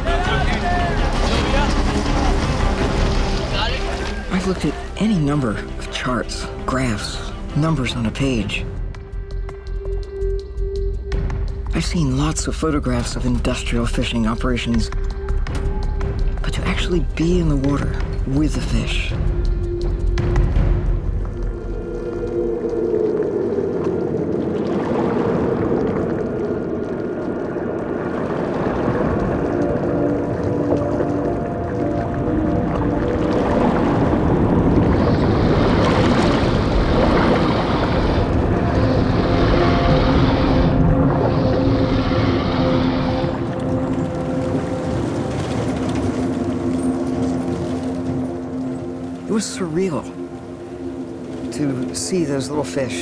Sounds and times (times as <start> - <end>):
Music: 0.0 - 24.3, 27.9 - 53.0
Ocean: 0.0 - 53.0.